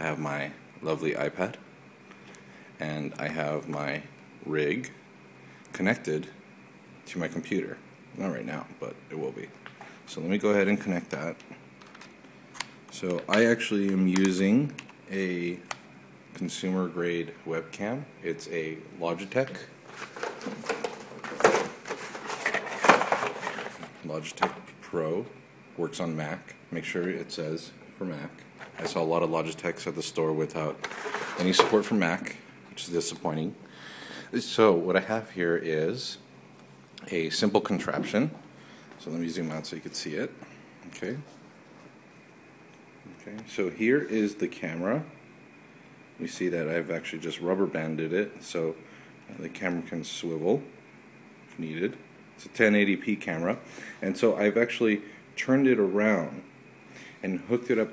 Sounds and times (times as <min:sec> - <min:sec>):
Speech: 0:00.0 - 0:01.6, 0:02.8 - 0:05.0, 0:05.7 - 0:06.4, 0:07.0 - 0:11.6, 0:12.9 - 0:15.7, 0:16.3 - 0:19.8, 0:23.8 - 0:33.6, 0:34.3 - 0:36.3, 0:37.0 - 0:38.4, 0:39.0 - 0:41.4, 0:43.1 - 0:45.2, 0:46.2 - 0:50.8, 0:51.5 - 0:56.5, 0:57.2 - 0:57.9.